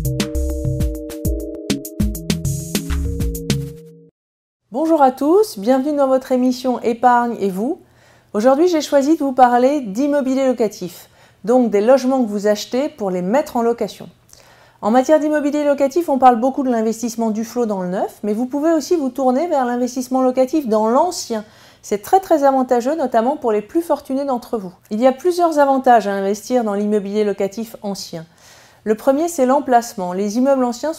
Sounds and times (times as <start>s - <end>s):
Speech: 4.7s - 7.8s, 8.4s - 14.2s, 14.8s - 28.3s, 28.9s - 30.9s.